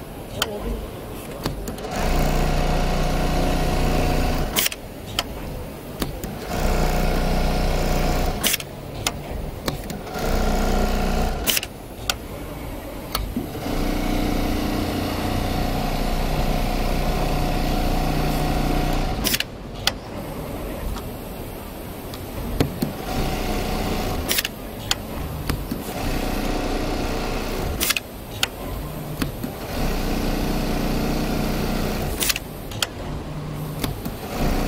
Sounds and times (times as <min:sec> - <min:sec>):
Sewing machine: 0:01.6 - 0:04.8, 0:06.1 - 0:08.7, 0:09.7 - 0:11.8, 0:13.3 - 0:19.5, 0:22.8 - 0:33.0, 0:33.7 - 0:34.6.